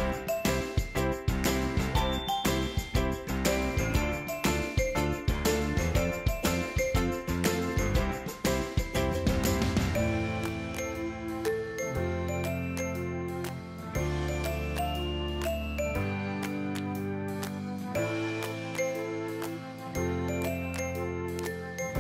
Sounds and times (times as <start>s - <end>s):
Music: 0.0s - 22.0s.